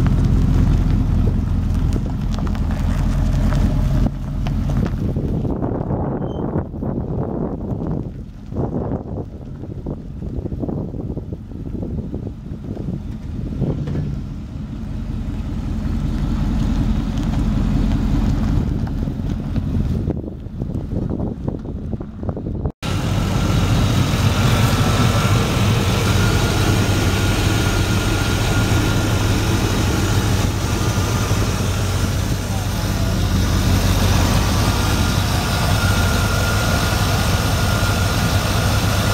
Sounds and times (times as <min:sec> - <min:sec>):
Car: 0:00.0 - 0:39.1.